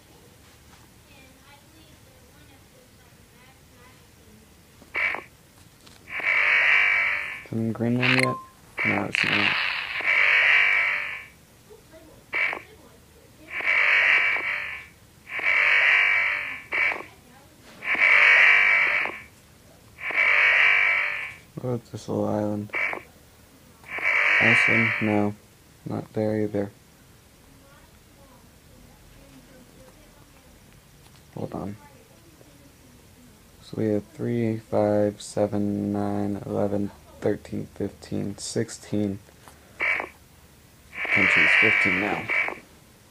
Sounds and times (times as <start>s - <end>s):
Inside, small room: 0.0s - 43.1s.